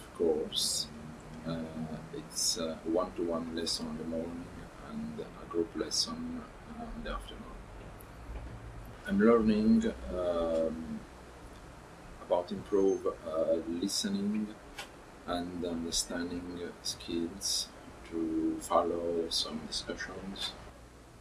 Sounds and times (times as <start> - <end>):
Speech: 0.0 - 7.6, 9.1 - 11.0, 12.2 - 14.6, 15.3 - 20.6.